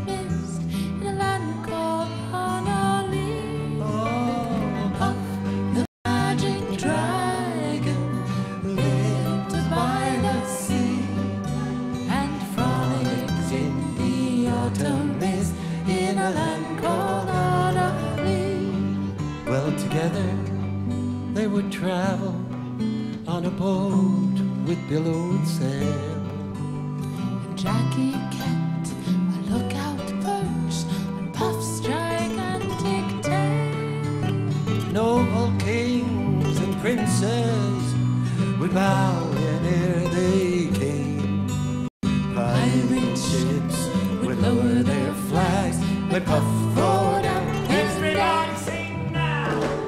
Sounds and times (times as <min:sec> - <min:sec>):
Singing: 0:00.0 - 0:20.6, 0:42.3 - 0:49.8
Music: 0:00.0 - 0:49.8.